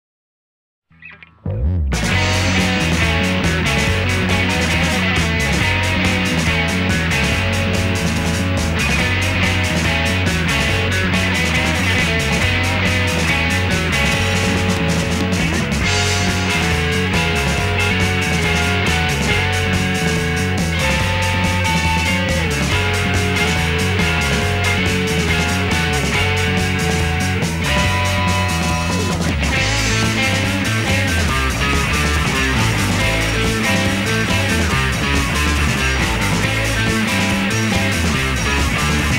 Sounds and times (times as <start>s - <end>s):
Bass guitar: 0.9s - 39.1s.